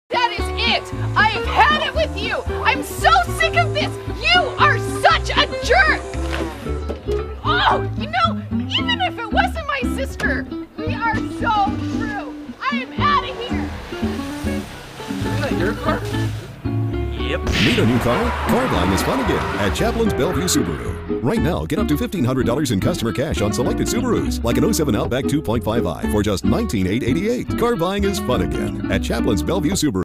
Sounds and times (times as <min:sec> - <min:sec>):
Music: 0:00.1 - 0:30.0
Speech: 0:17.1 - 0:30.0.